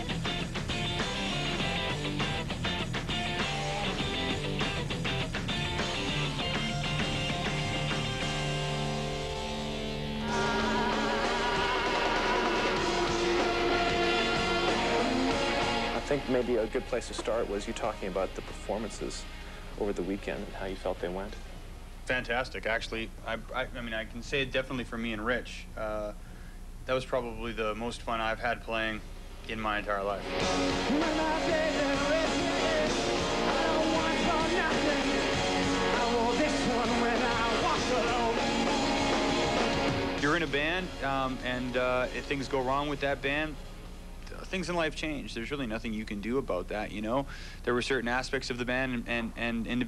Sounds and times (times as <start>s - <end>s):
Exciting music: 0.0s - 18.6s, 30.3s - 41.5s
Soundtrack music: 3.2s - 18.0s, 30.3s - 41.5s
Pop music: 10.2s - 18.0s, 30.3s - 42.2s
Speech: 16.0s - 21.4s, 22.1s - 26.2s, 26.9s - 30.2s, 40.2s - 43.6s, 44.3s - 49.8s.